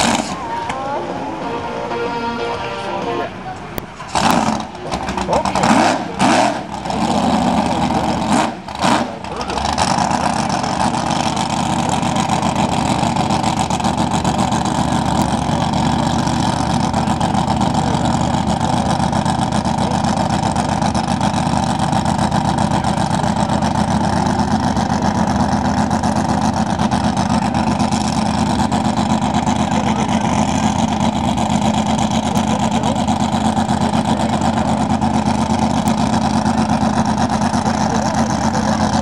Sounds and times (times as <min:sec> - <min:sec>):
Motorboat, speedboat: 0:00.0 - 0:01.7, 0:03.5 - 0:39.0
Speech: 0:04.8 - 0:06.3, 0:09.2 - 0:09.7, 0:29.6 - 0:30.8, 0:32.2 - 0:33.1, 0:37.6 - 0:39.0.